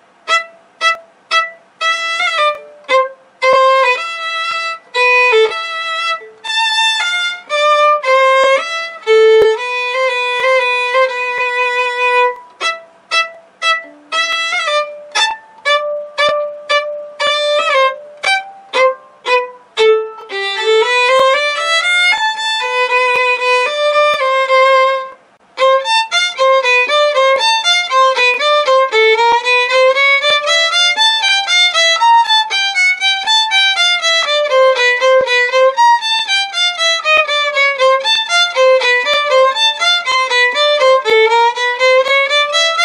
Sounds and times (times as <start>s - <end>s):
Violin, fiddle: 0.0s - 42.8s.